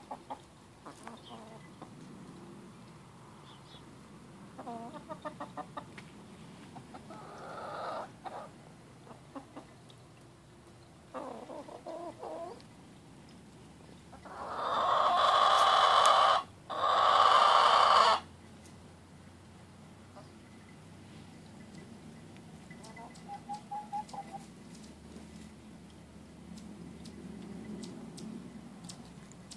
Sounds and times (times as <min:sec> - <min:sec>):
Cluck: 0:00.0 - 0:01.9, 0:04.6 - 0:06.0, 0:09.1 - 0:09.7, 0:22.8 - 0:24.5.